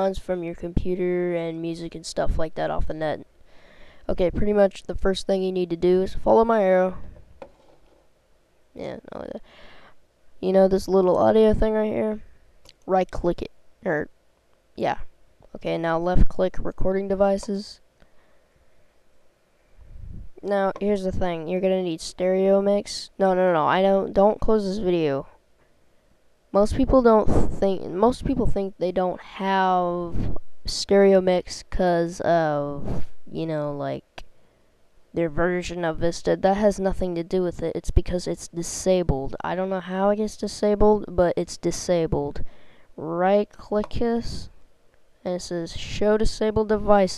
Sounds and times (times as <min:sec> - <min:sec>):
Speech: 0:00.0 - 0:03.3, 0:04.1 - 0:07.1, 0:08.8 - 0:09.5, 0:10.4 - 0:14.1, 0:14.8 - 0:17.8, 0:20.4 - 0:25.4, 0:26.5 - 0:34.2, 0:35.1 - 0:42.4, 0:43.0 - 0:44.5, 0:45.2 - 0:47.1.